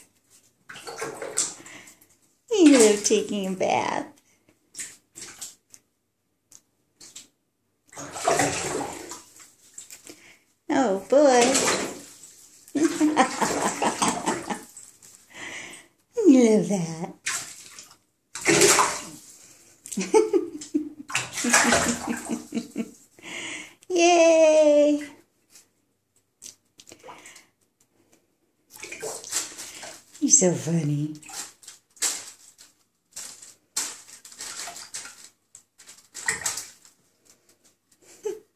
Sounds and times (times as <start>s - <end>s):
Bathtub (filling or washing): 0.0s - 38.5s.